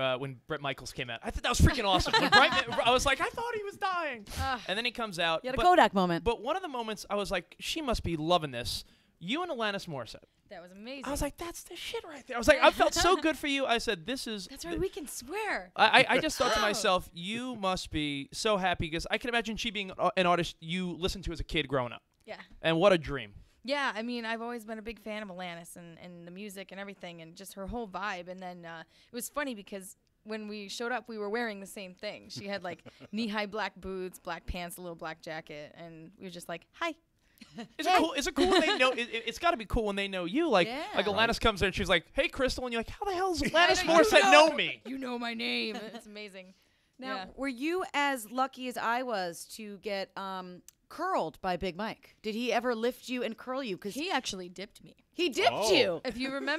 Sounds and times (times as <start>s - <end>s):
Speech: 0.0s - 3.8s, 12.2s - 14.3s, 15.8s - 22.0s, 37.8s - 46.2s, 47.0s - 47.4s, 55.2s - 56.5s.